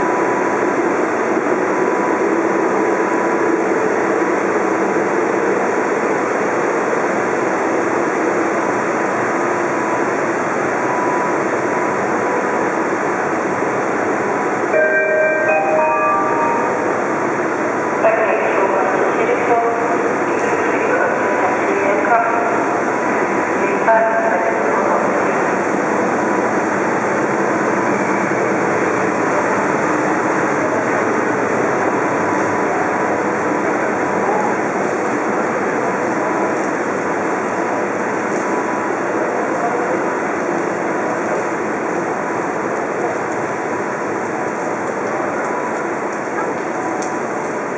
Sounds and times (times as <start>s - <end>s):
Vehicle: 25.3s - 47.7s.